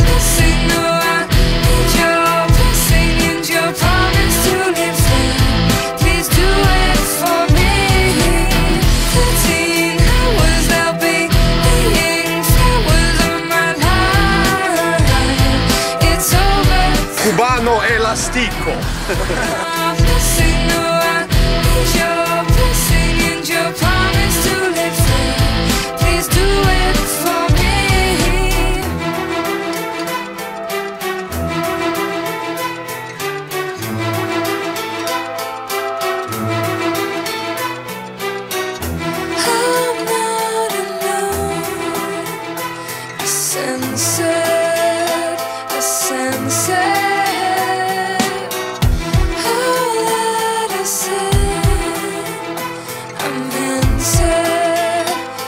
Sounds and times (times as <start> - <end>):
Independent music: 0.0 - 55.4.